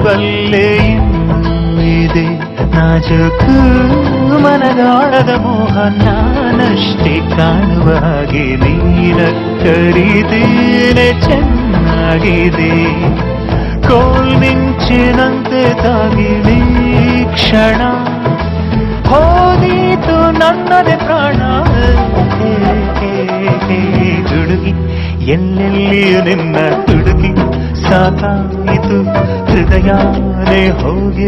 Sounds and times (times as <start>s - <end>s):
Music: 0.0s - 31.2s.